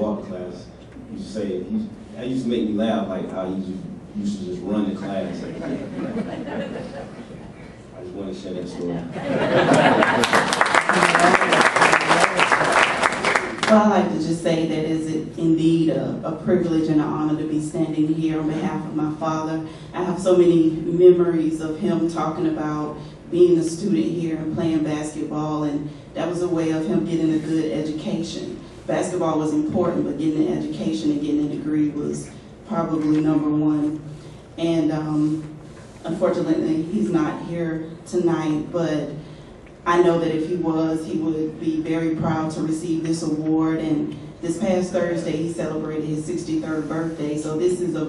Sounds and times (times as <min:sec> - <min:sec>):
Narration, monologue: 0:00.0 - 0:10.6, 0:11.8 - 0:48.0
Female speech, woman speaking: 0:13.6 - 0:34.0, 0:34.6 - 0:39.2, 0:39.8 - 0:48.0.